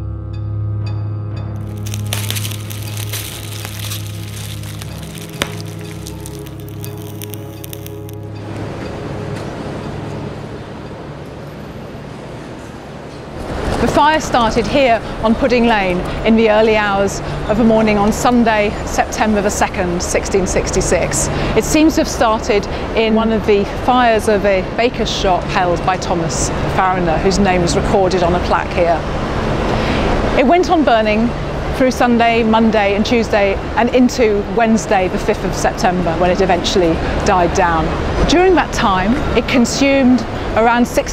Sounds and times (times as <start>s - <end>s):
Music: 0.0s - 11.0s
Fire: 1.6s - 8.5s, 35.0s - 41.1s
Speech: 13.8s - 29.0s, 30.4s - 41.1s.